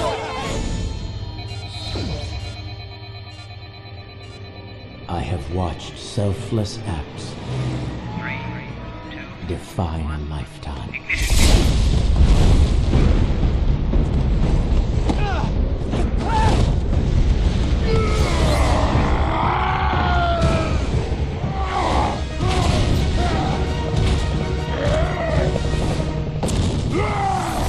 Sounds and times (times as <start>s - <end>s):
Music: 0.0s - 27.6s
Speech: 9.4s - 11.0s
Eruption: 11.1s - 27.6s.